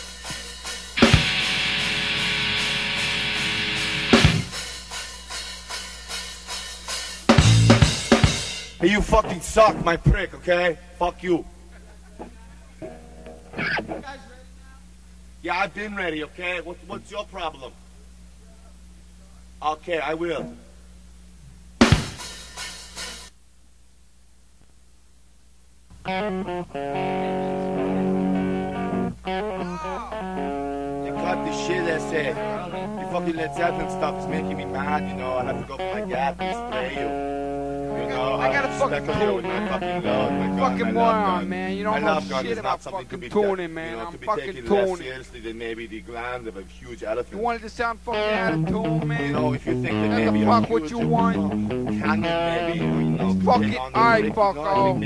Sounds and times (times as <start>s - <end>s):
Drum kit: 0.0s - 10.2s, 21.8s - 23.3s, 26.1s - 42.4s
Speech: 8.8s - 12.8s, 14.0s - 14.8s, 15.4s - 20.7s, 27.0s - 28.1s, 31.0s - 37.2s, 37.8s - 55.0s.